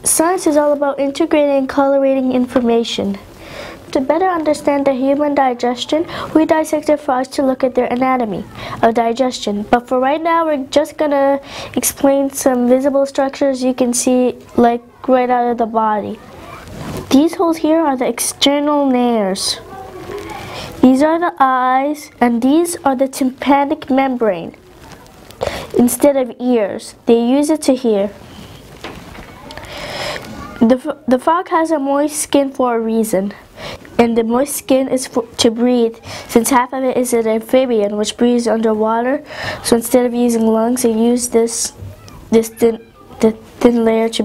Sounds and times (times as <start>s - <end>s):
Speech: 0.0s - 3.3s, 3.9s - 28.2s, 30.3s - 33.4s, 34.0s - 44.2s.